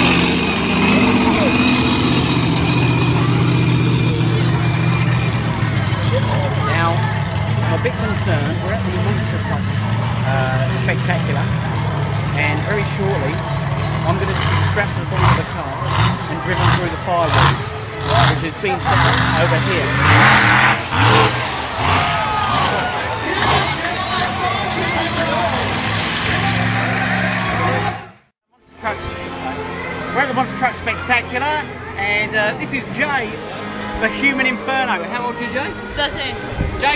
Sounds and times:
Truck: 0.0 - 36.9
Music: 28.5 - 36.9.

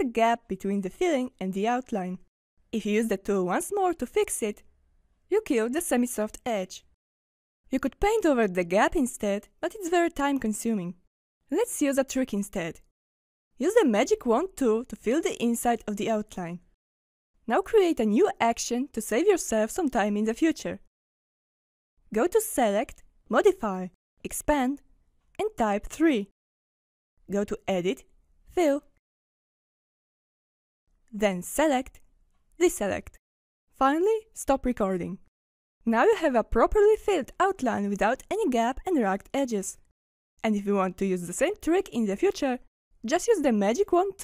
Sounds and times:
Speech: 0.0 - 2.2, 2.8 - 4.6, 5.3 - 6.9, 7.7 - 12.8, 13.6 - 16.7, 17.5 - 20.9, 22.1 - 24.8, 25.4 - 26.3, 27.3 - 28.9, 31.2 - 32.0, 32.6 - 33.2, 33.8 - 35.2, 35.9 - 39.8, 40.4 - 44.2.

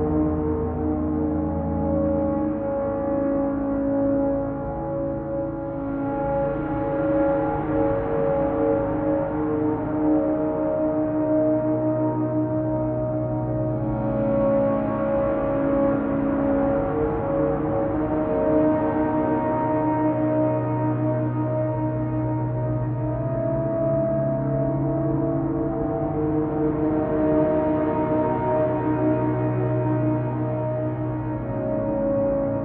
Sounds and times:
Ambient music: 0.0 - 32.6.

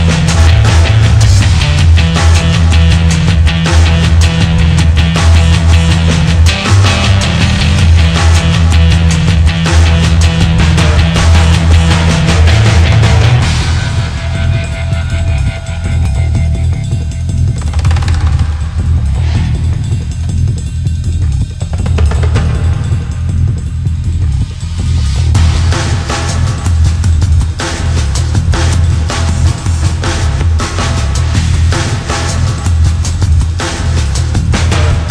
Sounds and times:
Angry music: 0.0 - 35.1.

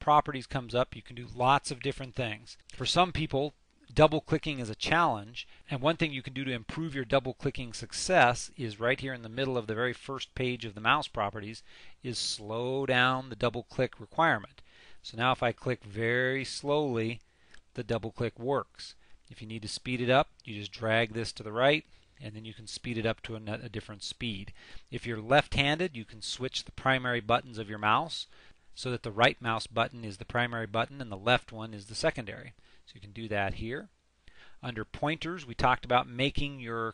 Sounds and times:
Speech: 0.0 - 17.2, 17.8 - 33.9, 34.6 - 36.9.

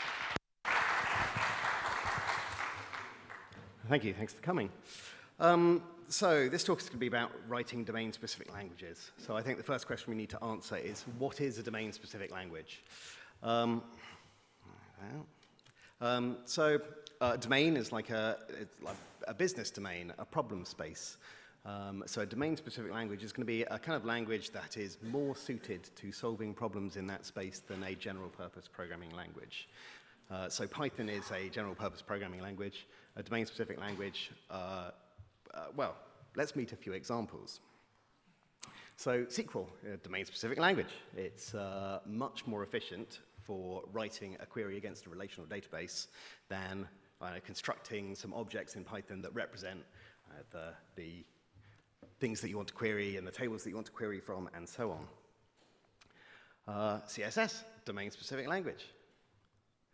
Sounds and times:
Speech: 3.8 - 4.8, 5.4 - 12.8, 13.4 - 13.9, 14.9 - 15.4, 16.0 - 29.7, 30.3 - 37.7, 39.0 - 51.4, 52.2 - 55.3, 56.7 - 59.0.

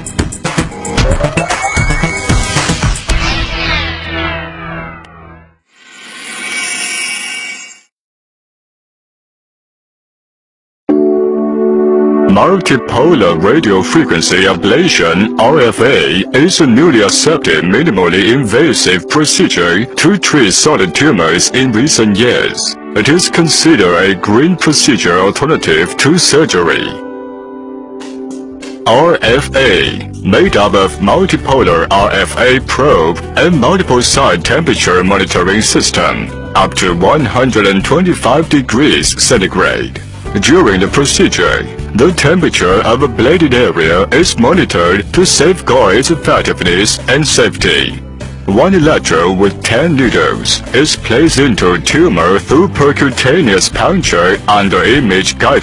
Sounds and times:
Music: 0.0 - 7.9, 10.9 - 55.6.

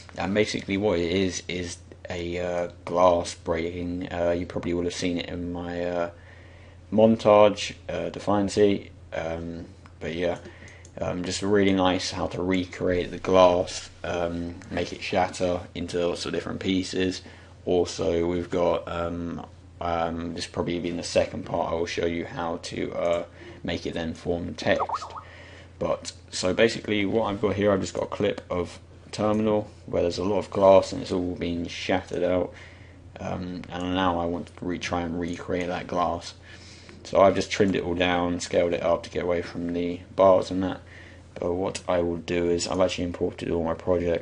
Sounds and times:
Speech: 0.0 - 6.2, 6.9 - 32.6, 33.2 - 36.4, 37.0 - 44.2.

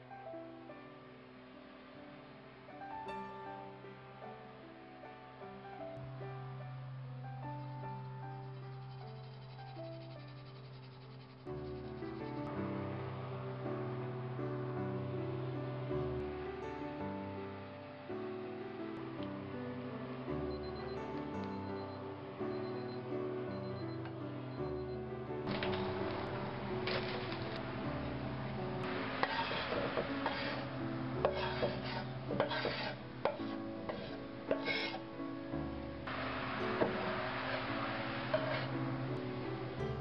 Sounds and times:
Music: 0.0 - 40.0.

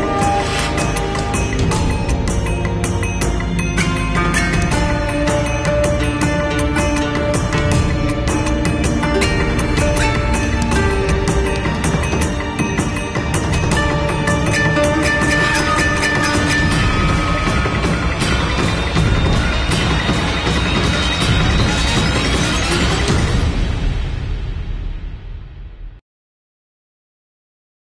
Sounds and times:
Music: 0.0 - 26.0.

